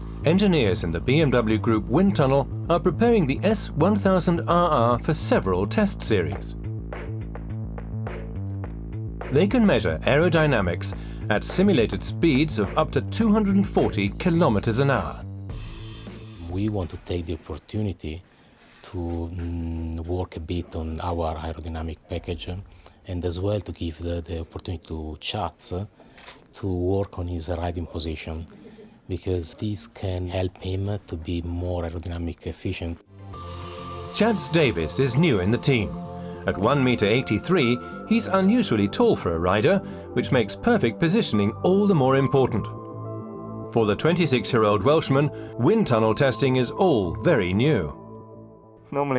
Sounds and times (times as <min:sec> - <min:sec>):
Music: 0:00.0 - 0:17.6, 0:33.0 - 0:49.1
Speech: 0:00.2 - 0:06.6, 0:09.3 - 0:15.2, 0:16.4 - 0:18.2, 0:18.8 - 0:25.9, 0:26.5 - 0:33.0, 0:34.2 - 0:42.7, 0:43.7 - 0:48.0, 0:48.9 - 0:49.1.